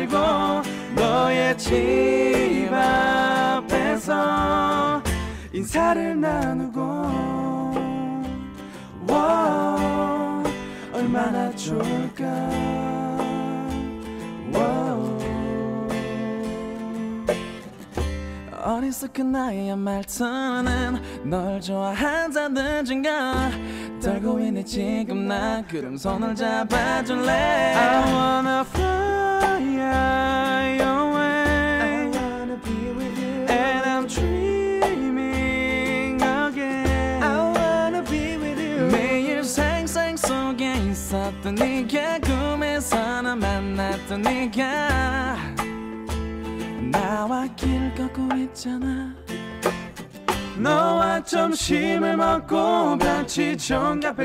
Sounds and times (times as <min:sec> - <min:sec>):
Music: 0:00.0 - 0:54.2.